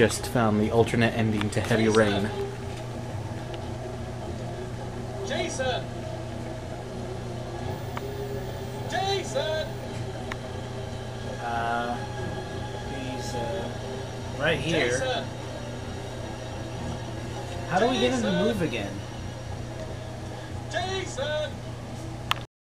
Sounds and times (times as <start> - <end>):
Speech: 0.0 - 2.4, 11.4 - 12.0, 17.7 - 19.0.